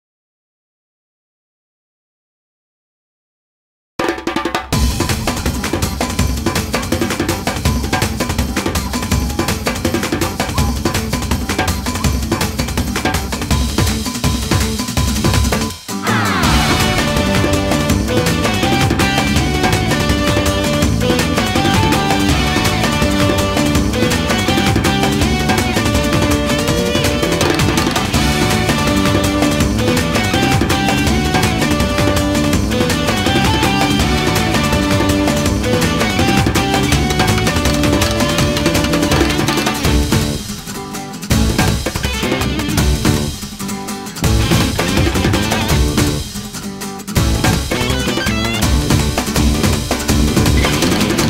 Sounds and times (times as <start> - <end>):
Music: 4.0 - 51.3.